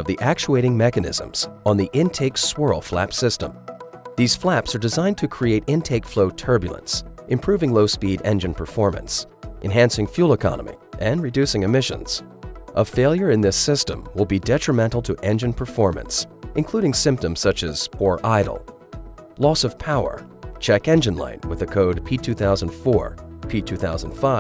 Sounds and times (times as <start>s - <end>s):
Speech: 0.0s - 3.6s, 4.2s - 12.2s, 12.8s - 18.6s, 19.4s - 24.4s
Music: 0.0s - 24.4s.